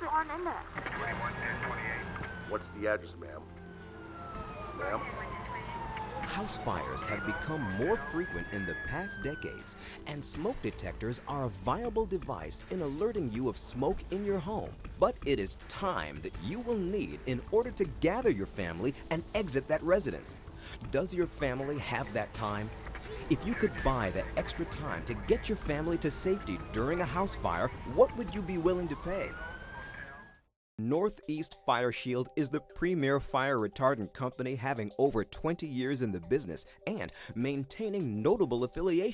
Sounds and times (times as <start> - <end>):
Speech: 6.3 - 20.2, 20.9 - 29.3, 30.8 - 39.1.